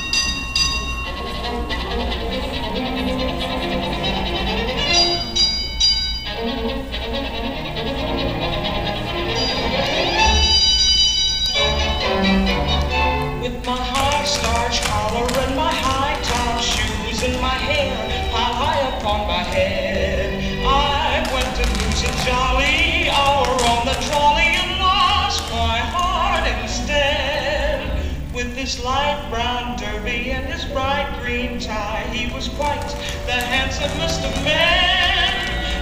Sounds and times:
Music: 0:00.0 - 0:35.8.

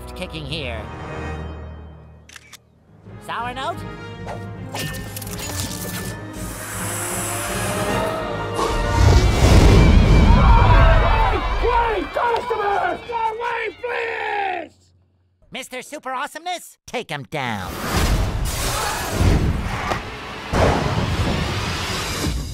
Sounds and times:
Speech: 0:15.5 - 0:17.8.

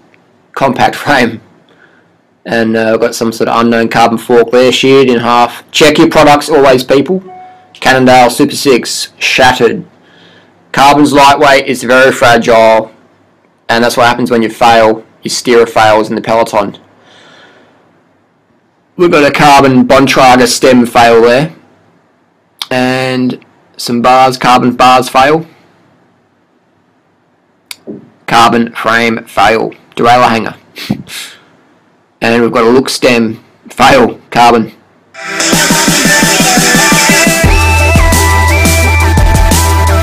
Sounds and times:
Speech: 0:00.5 - 0:01.5, 0:02.4 - 0:09.9, 0:10.7 - 0:13.0, 0:13.7 - 0:16.9, 0:19.0 - 0:21.6, 0:22.6 - 0:25.6, 0:27.7 - 0:31.4, 0:32.2 - 0:34.8.

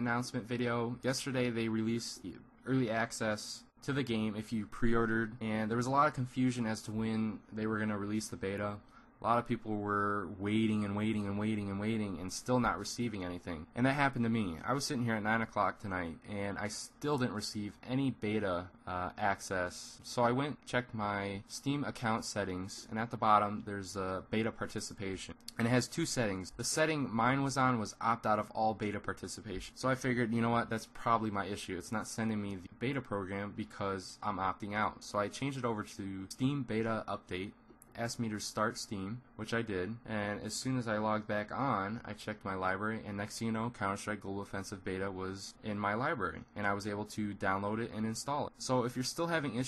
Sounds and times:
Speech: 0:00.0 - 0:49.6.

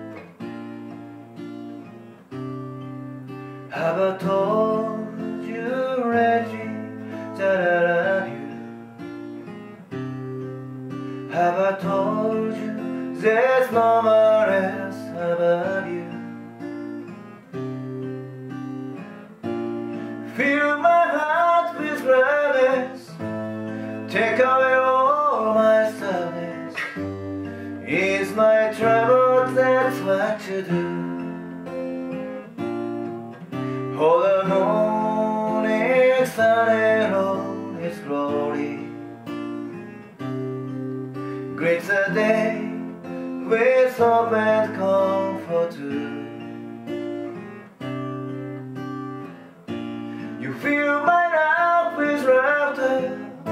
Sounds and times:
Guitar: 0:00.0 - 0:53.5.

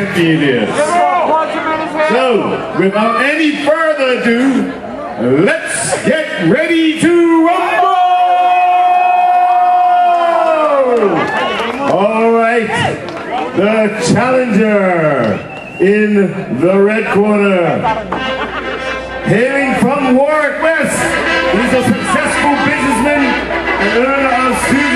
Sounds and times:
Speech: 0:00.0 - 0:08.3, 0:11.8 - 0:13.0, 0:13.6 - 0:18.1, 0:19.3 - 0:24.9
Inside, public space: 0:00.0 - 0:24.9.

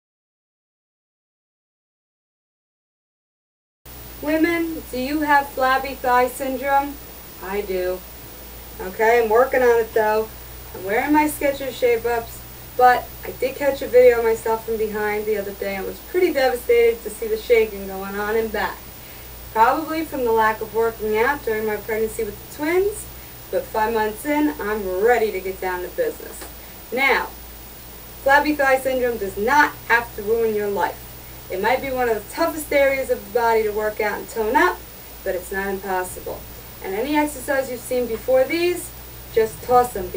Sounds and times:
Speech: 0:04.2 - 0:08.0, 0:08.8 - 0:18.8, 0:19.6 - 0:27.4, 0:28.2 - 0:40.1.

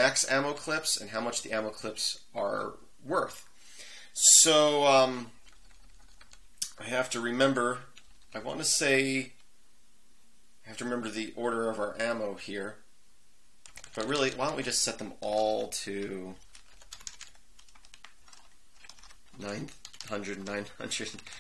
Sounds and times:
Speech: 0:00.0 - 0:03.5, 0:04.2 - 0:05.3, 0:06.6 - 0:09.4, 0:10.7 - 0:12.8, 0:14.0 - 0:16.4, 0:19.4 - 0:21.4
Computer keyboard: 0:05.4 - 0:06.4, 0:08.0 - 0:08.4, 0:13.6 - 0:14.7, 0:15.3 - 0:21.4.

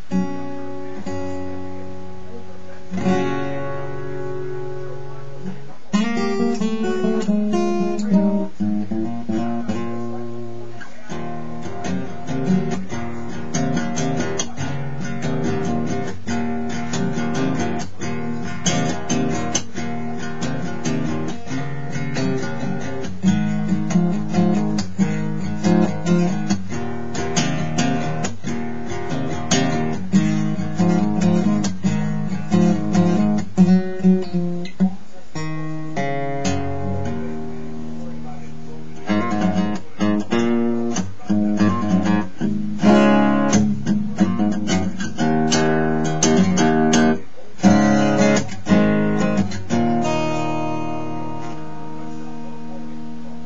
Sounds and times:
Acoustic guitar: 0:00.0 - 0:53.4
Strum: 0:00.0 - 0:53.4.

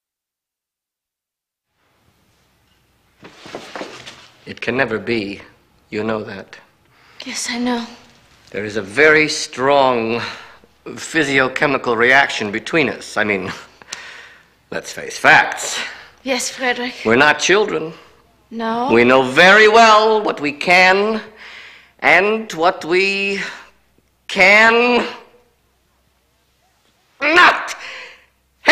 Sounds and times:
Inside, small room: 0:00.0 - 0:28.7.

